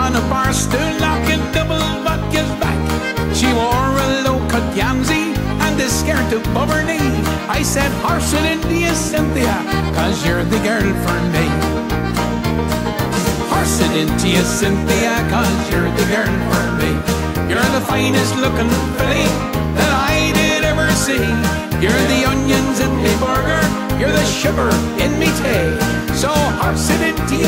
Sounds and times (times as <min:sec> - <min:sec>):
Music: 0:00.0 - 0:27.4.